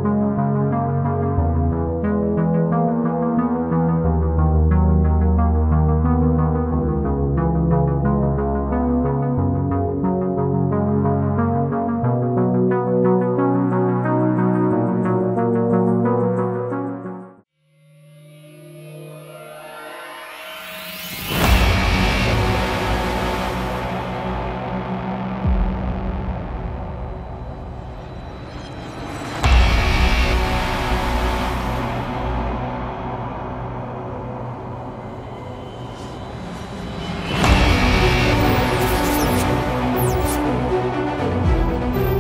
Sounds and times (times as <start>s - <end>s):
Music: 0.0s - 42.2s.